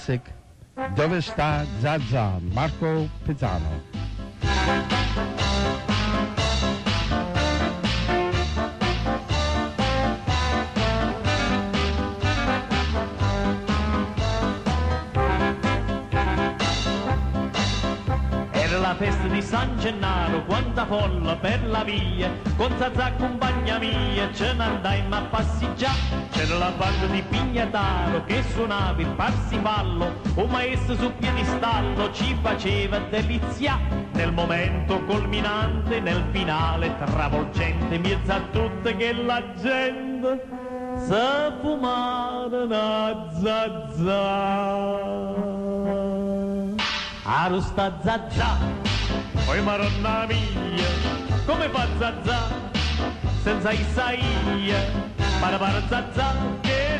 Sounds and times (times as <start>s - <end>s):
Music: 0.0s - 56.9s.